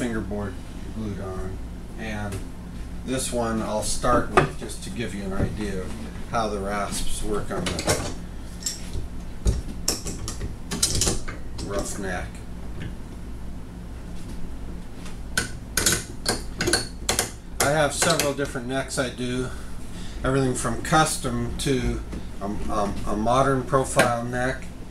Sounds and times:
Speech: 0.0 - 2.4, 3.1 - 8.0, 11.6 - 12.4, 17.6 - 19.6, 20.2 - 24.7.

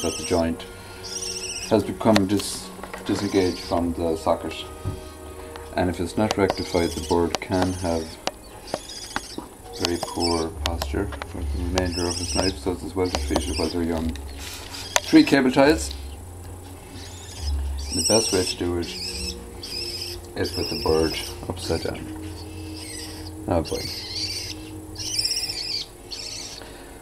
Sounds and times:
Speech: 0.0 - 0.6, 1.7 - 4.7, 5.8 - 8.2, 9.8 - 14.2, 15.1 - 16.0, 17.9 - 19.0, 20.4 - 22.1, 23.5 - 23.9
Bird: 0.0 - 5.2, 6.3 - 16.2, 16.9 - 26.8.

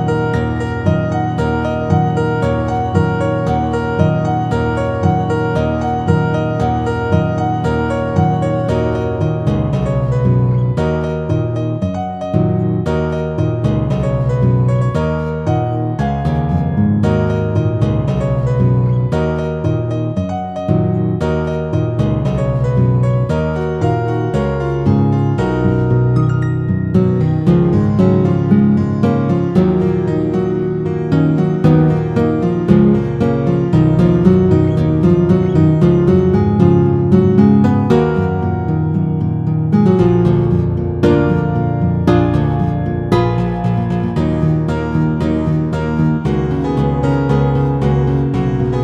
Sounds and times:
Acoustic guitar: 0.0 - 48.8
Strum: 0.0 - 48.8.

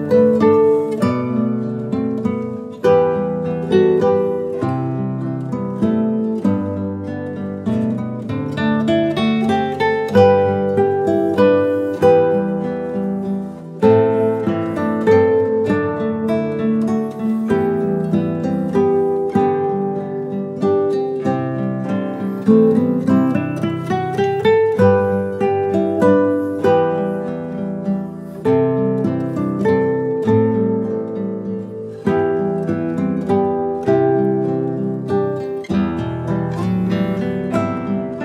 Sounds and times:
Music: 0.0 - 38.2.

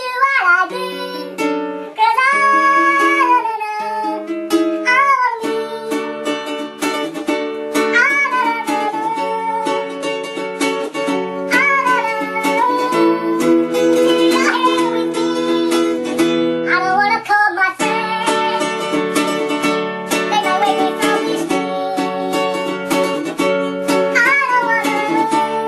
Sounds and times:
Guitar: 0.0 - 25.6.

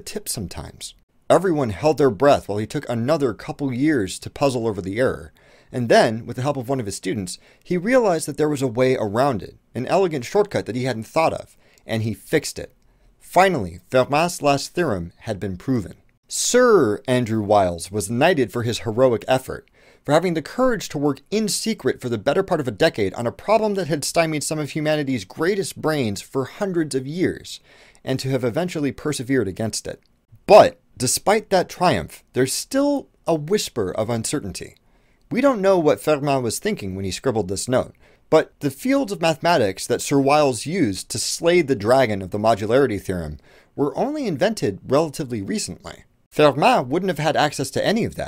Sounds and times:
Speech: 0.0 - 48.2.

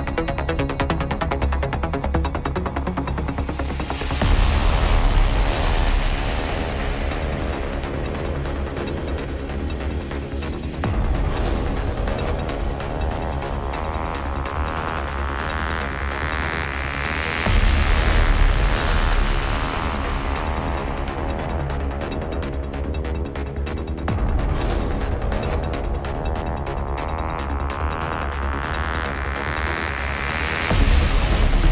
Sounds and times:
Music: 0.0 - 31.7.

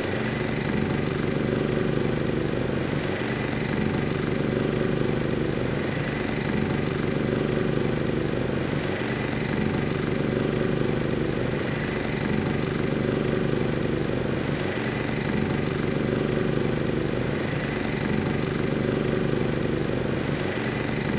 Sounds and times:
Lawn mower: 0.0 - 21.1.

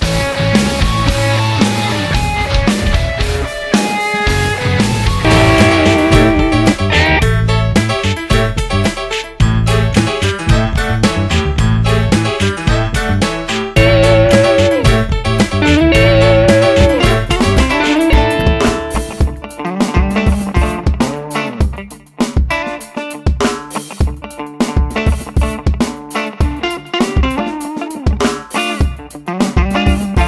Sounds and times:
Pop music: 0.1 - 9.1, 12.2 - 21.9, 24.2 - 30.2.

